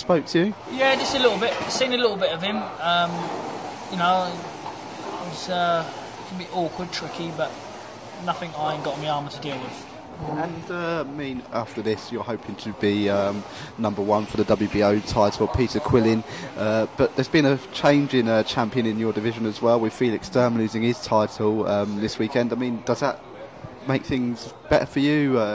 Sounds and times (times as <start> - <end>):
Speech: 11.0 - 25.5.